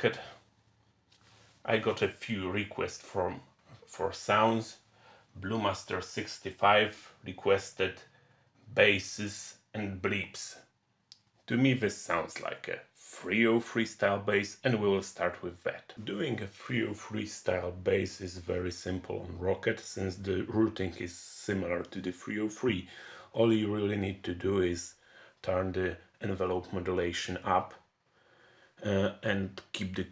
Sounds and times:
Speech: 0.0 - 0.4, 1.7 - 4.8, 5.4 - 8.1, 8.7 - 10.7, 11.5 - 27.9, 28.8 - 30.1.

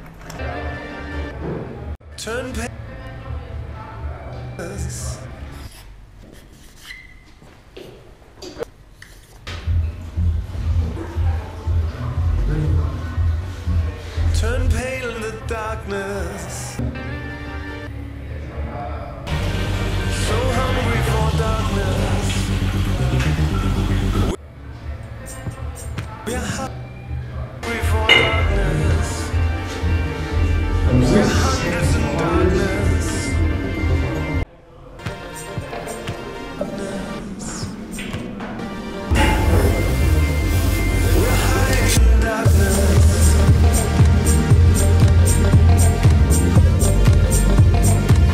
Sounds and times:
Music: 0.0 - 5.9, 9.5 - 48.3.

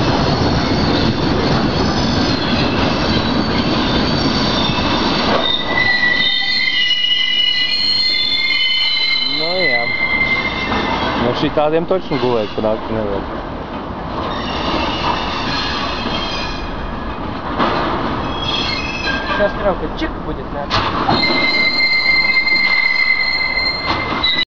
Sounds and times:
Railroad car, train wagon: 0.0 - 24.4
Train: 0.0 - 24.4
Train wheels squealing: 0.3 - 12.9, 14.3 - 17.0, 18.2 - 19.5, 21.1 - 24.4
Clickety-clack: 17.2 - 19.6, 20.7 - 24.4.

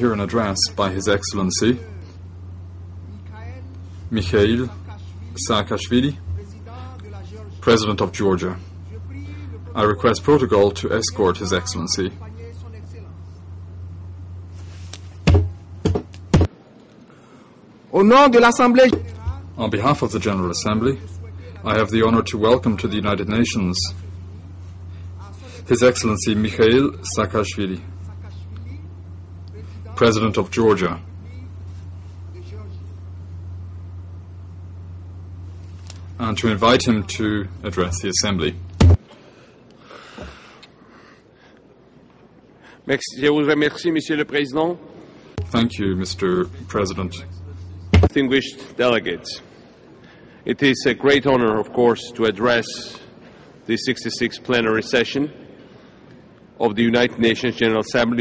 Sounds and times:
Male speech, man speaking: 0.0 - 2.2, 3.1 - 13.2, 17.9 - 24.0, 25.2 - 31.6, 32.4 - 32.9, 36.2 - 38.6, 42.9 - 44.8, 45.4 - 49.5, 50.5 - 53.1, 53.7 - 55.4, 56.6 - 58.2
Narration, monologue: 0.0 - 58.2.

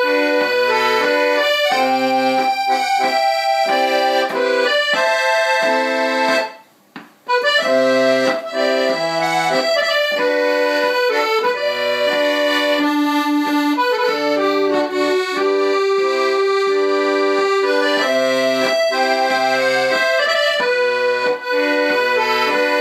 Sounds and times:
Accordion: 0.0 - 22.8.

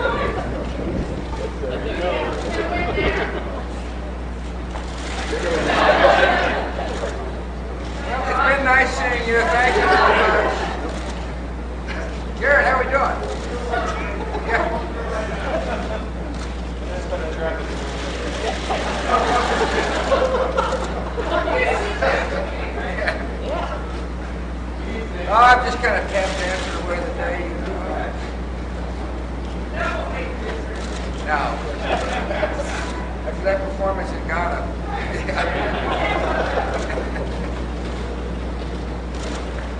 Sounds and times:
Speech: 24.8 - 28.3.

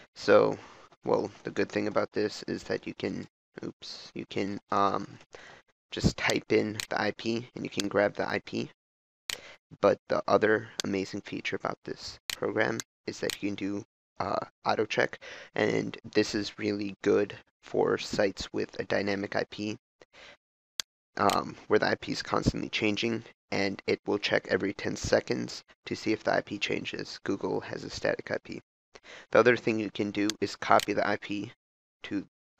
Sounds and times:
Speech: 0.0 - 5.2, 5.9 - 8.8, 9.8 - 19.8, 21.2 - 28.6, 29.3 - 32.3.

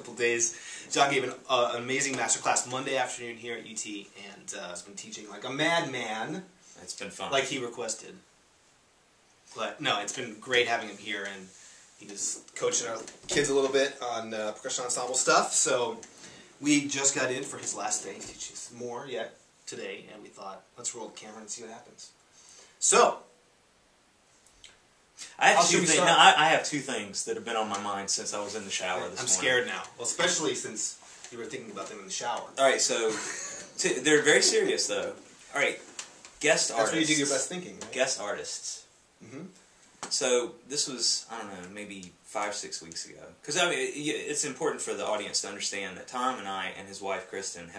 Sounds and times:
Speech: 0.0 - 8.2, 9.5 - 22.2, 22.8 - 23.3, 25.2 - 35.8, 36.4 - 47.7.

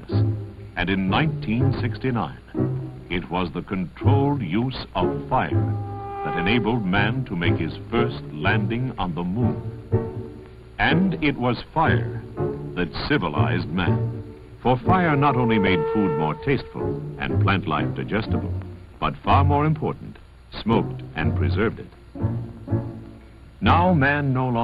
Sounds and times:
Music: 0.0 - 24.6
Speech: 0.8 - 2.5, 3.1 - 5.7, 6.3 - 9.6, 10.8 - 14.0, 14.6 - 21.9, 23.6 - 24.6.

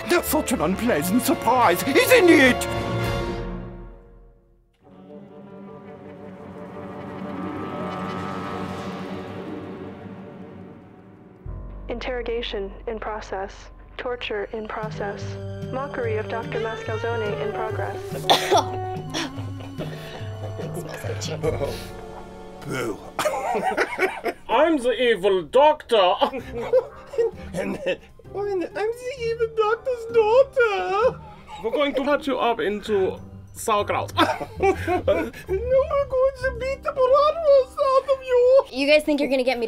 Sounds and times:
Music: 0.0 - 39.6.

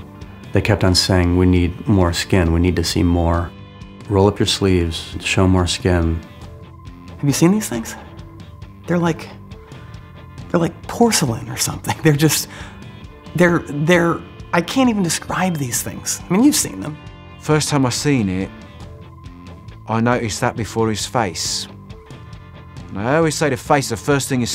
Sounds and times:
Music: 0.0 - 24.5
Speech: 0.5 - 3.5, 4.1 - 6.2, 7.2 - 8.1, 8.9 - 9.4, 10.5 - 12.5, 13.4 - 18.6, 19.9 - 21.8, 22.9 - 24.5.

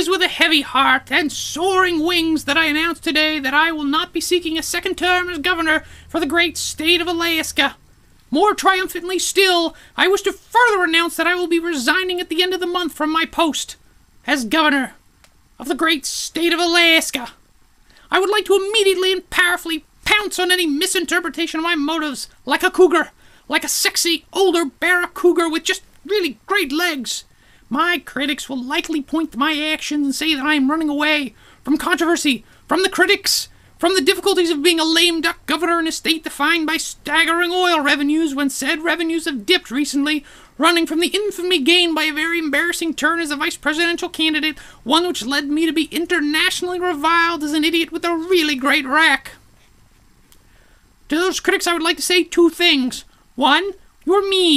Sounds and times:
Narration, monologue: 0.0 - 54.5.

